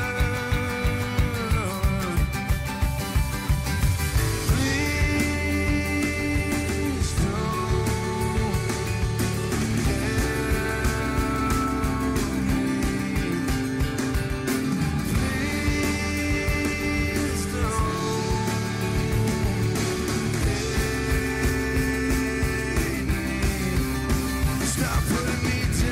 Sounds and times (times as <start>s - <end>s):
Grunge: 0.0s - 25.9s.